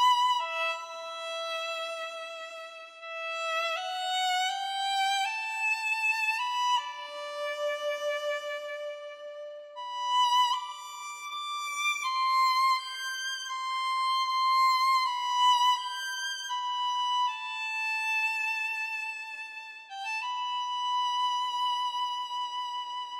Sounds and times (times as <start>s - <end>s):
Violin, fiddle: 0.0s - 23.2s.